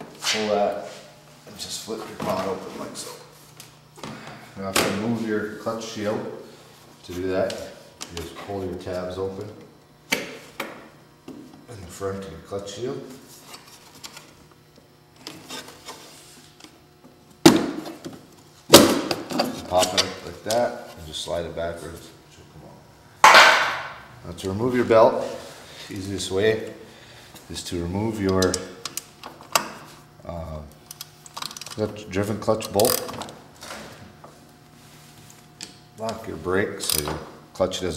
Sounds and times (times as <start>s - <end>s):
Speech: 0.2s - 3.3s, 4.6s - 6.4s, 7.0s - 9.6s, 11.7s - 13.2s, 19.6s - 22.8s, 24.2s - 26.8s, 27.5s - 28.8s, 30.2s - 30.8s, 31.8s - 33.1s, 36.0s - 37.9s.